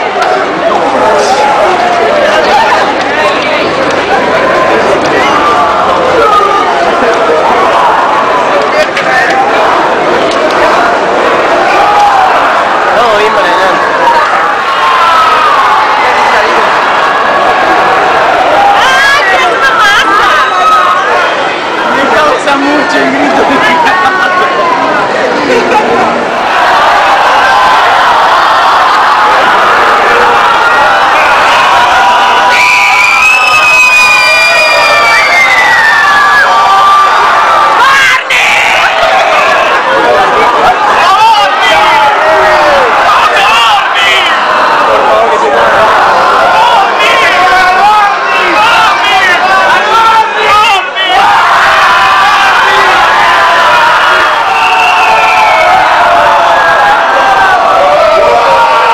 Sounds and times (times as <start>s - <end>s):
Speech: 12.9s - 14.2s, 21.8s - 26.3s.